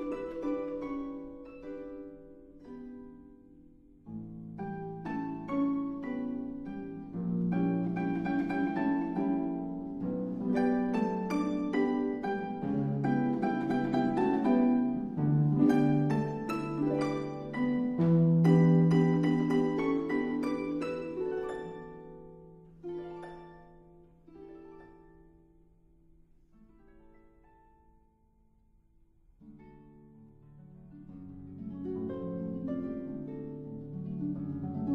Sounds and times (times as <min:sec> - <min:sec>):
Plucked string instrument: 0:00.0 - 0:28.3, 0:29.3 - 0:34.9
Harp: 0:00.0 - 0:28.4, 0:29.3 - 0:34.9
Inside, large room or hall: 0:00.0 - 0:34.9.